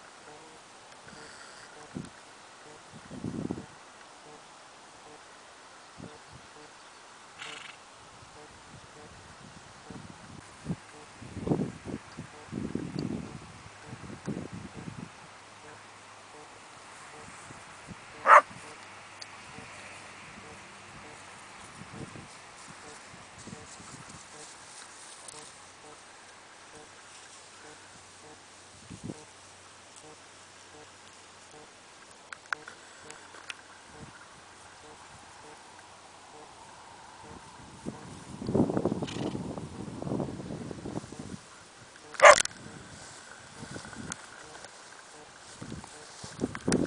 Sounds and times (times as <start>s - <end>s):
Clip-clop: 18.2s - 29.3s, 37.3s - 39.4s, 41.0s - 46.8s.